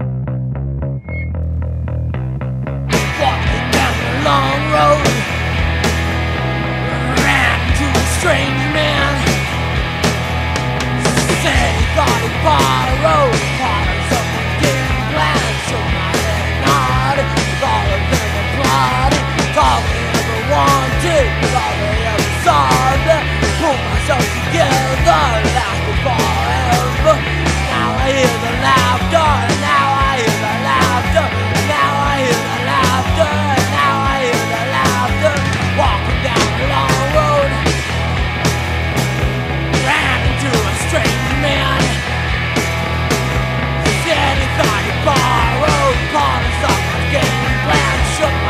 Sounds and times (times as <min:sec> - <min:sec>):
Music: 0:00.0 - 0:48.5.